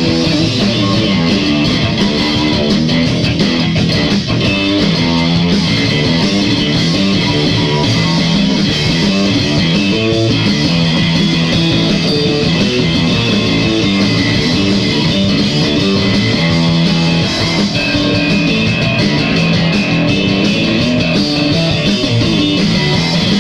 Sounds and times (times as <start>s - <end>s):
Guitar: 0.0s - 23.4s.